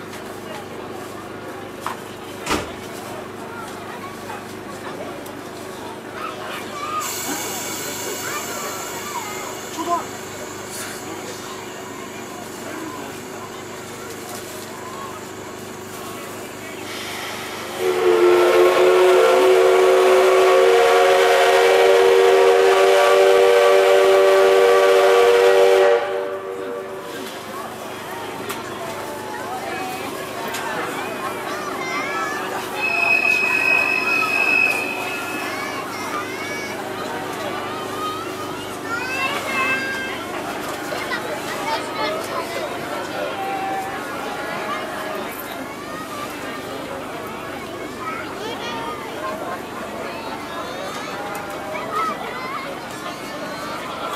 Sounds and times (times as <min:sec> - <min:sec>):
Train horn: 0:17.8 - 0:27.1
Train wheels squealing: 0:32.7 - 0:35.6.